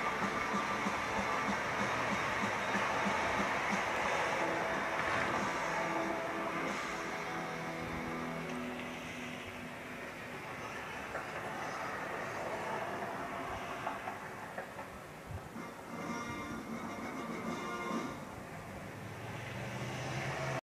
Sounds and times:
Music: 0.0 - 11.8, 15.5 - 18.5
Television: 0.0 - 20.6.

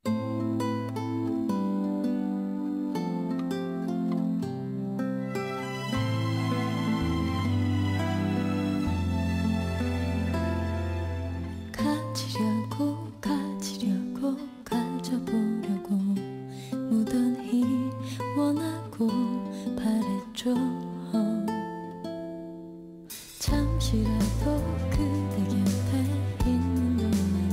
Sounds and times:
Tender music: 0.1 - 13.8, 23.4 - 27.5.

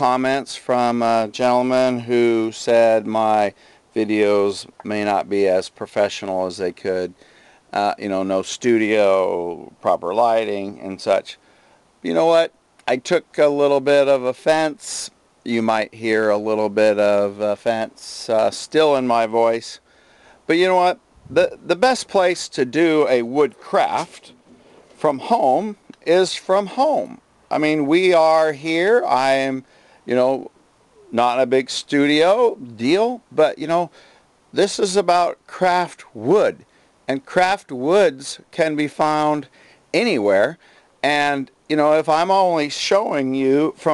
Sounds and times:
Speech: 0.0 - 11.4, 12.0 - 19.8, 20.5 - 24.4, 25.0 - 30.5, 31.1 - 43.9.

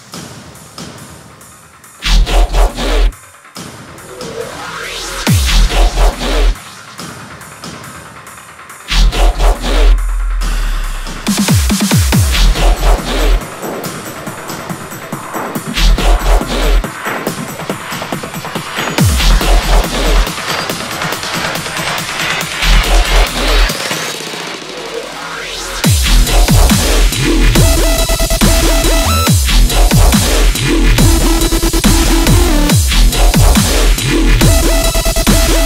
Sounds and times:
Music: 0.0 - 35.6.

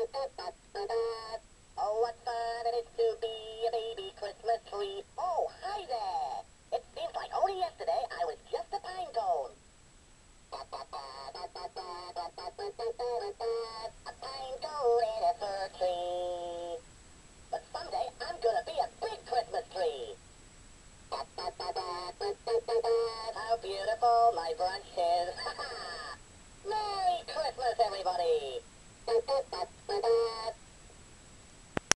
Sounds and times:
Synthetic singing: 0.0 - 9.6, 10.6 - 16.8, 17.5 - 20.2, 21.1 - 25.6, 26.7 - 30.6.

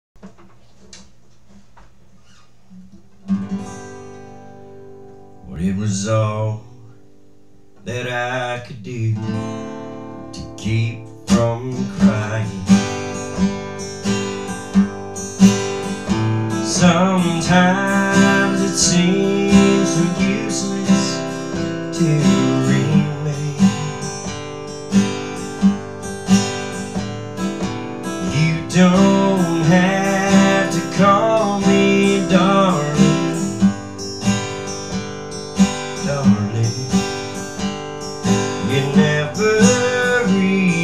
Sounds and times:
Guitar: 0.2 - 40.8.

